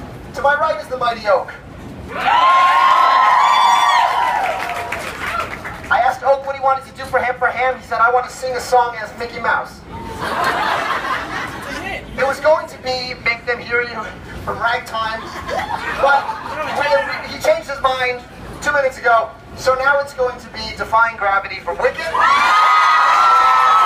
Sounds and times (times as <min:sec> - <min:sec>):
Speech: 0:00.4 - 0:01.6, 0:05.9 - 0:09.8, 0:11.8 - 0:15.3, 0:16.0 - 0:22.2.